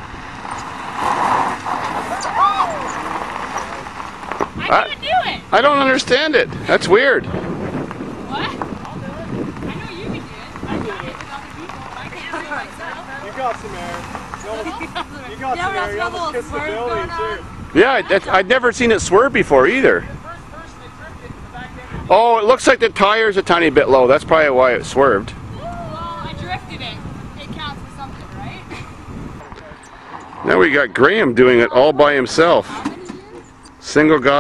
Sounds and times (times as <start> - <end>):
Car: 0.0 - 34.4.